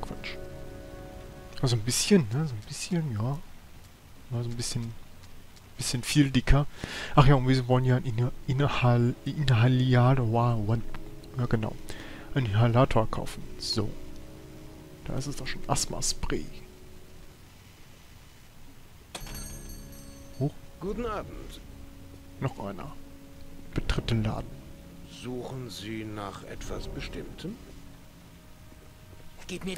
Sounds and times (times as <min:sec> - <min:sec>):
Music: 0:00.0 - 0:03.5, 0:06.1 - 0:18.0, 0:19.1 - 0:29.7
Rain on surface: 0:00.0 - 0:29.7
Speech: 0:01.6 - 0:03.4, 0:04.3 - 0:05.0, 0:05.8 - 0:10.8, 0:12.4 - 0:14.0, 0:15.1 - 0:16.6, 0:20.4 - 0:21.6, 0:22.4 - 0:23.0, 0:25.1 - 0:27.6, 0:29.4 - 0:29.7.